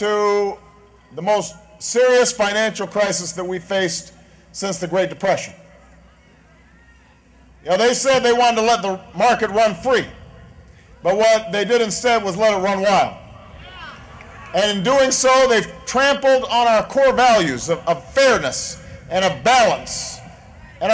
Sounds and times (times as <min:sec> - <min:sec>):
Speech: 0:01.2 - 0:05.6, 0:07.6 - 0:10.2, 0:11.0 - 0:13.2, 0:14.5 - 0:20.9.